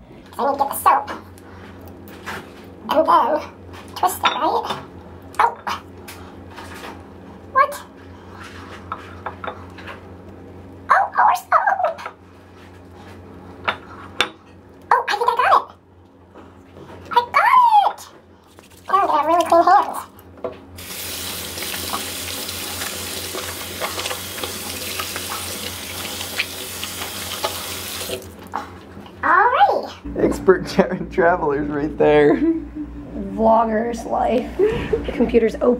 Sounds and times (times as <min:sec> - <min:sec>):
Water tap, faucet: 0:18.5 - 0:20.0, 0:20.8 - 0:28.4
Sink (filling or washing): 0:18.5 - 0:20.1, 0:20.8 - 0:28.5
Water: 0:18.5 - 0:20.1, 0:20.8 - 0:28.3.